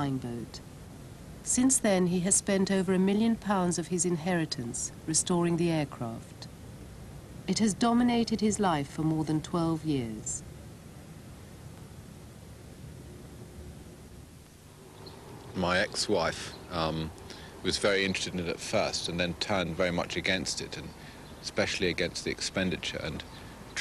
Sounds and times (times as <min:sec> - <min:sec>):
Speech: 0:00.0 - 0:00.6, 0:01.5 - 0:06.5, 0:07.5 - 0:10.4, 0:15.6 - 0:23.2.